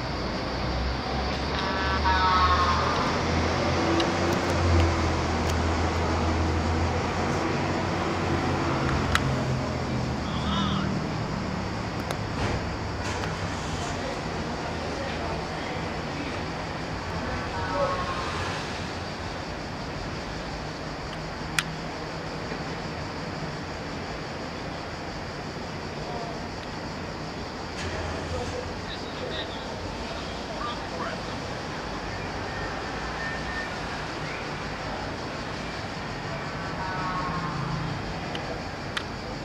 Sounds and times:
Speech: 0:28.0 - 0:31.4.

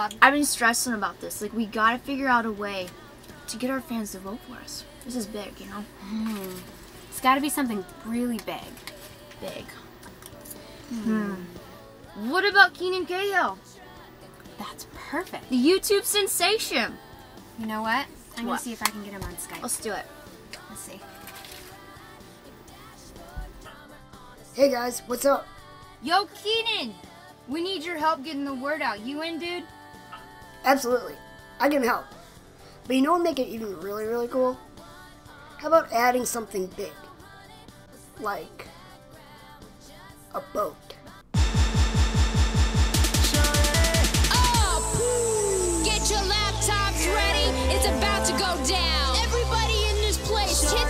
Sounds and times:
Music: 0:00.0 - 0:50.9
Speech: 0:24.6 - 0:29.7, 0:32.9 - 0:34.6, 0:35.6 - 0:37.0, 0:38.2 - 0:38.7.

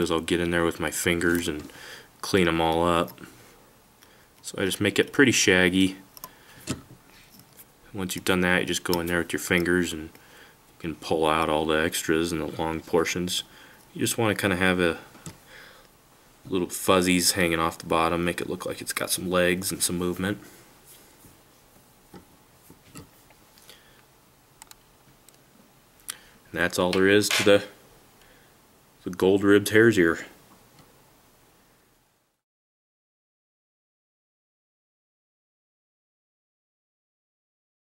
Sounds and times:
Speech: 0:00.0 - 0:03.3, 0:04.4 - 0:06.1, 0:07.9 - 0:10.2, 0:10.8 - 0:15.1, 0:16.5 - 0:20.5, 0:26.5 - 0:27.8, 0:29.0 - 0:30.4.

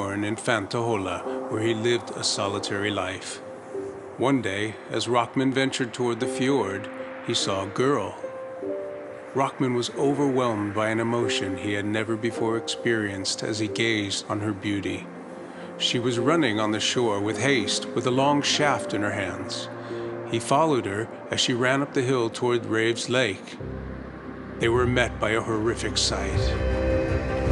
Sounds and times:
Speech: 0:00.0 - 0:03.4, 0:04.2 - 0:08.2, 0:09.4 - 0:15.1, 0:15.8 - 0:19.7, 0:20.3 - 0:23.6, 0:24.6 - 0:26.6
Music: 0:00.0 - 0:27.5.

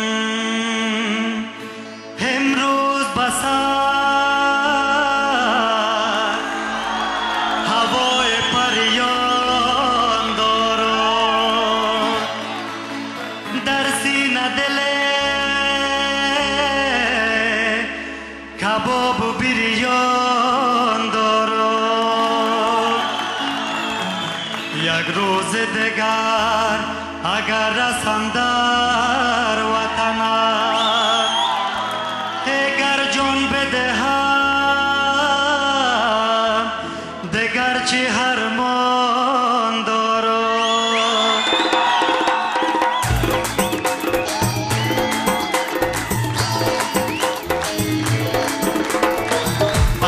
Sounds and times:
Music: 0:00.0 - 0:50.0
Singing: 0:02.2 - 0:18.0, 0:18.6 - 0:50.0.

